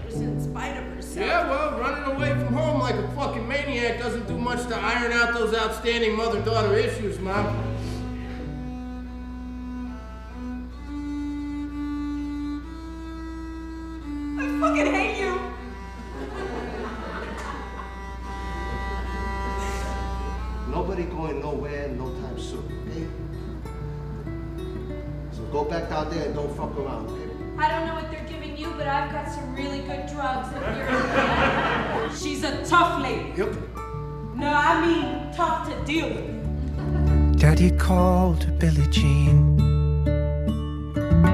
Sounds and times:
Music: 0.0s - 41.3s.

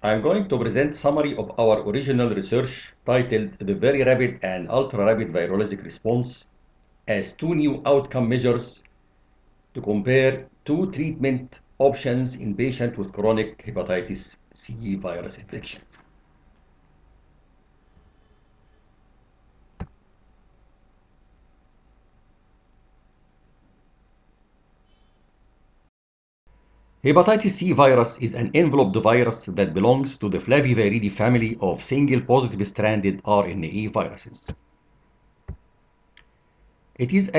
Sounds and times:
Speech: 0.0s - 6.4s, 7.1s - 8.8s, 9.8s - 15.9s, 27.1s - 34.6s, 37.0s - 37.3s.

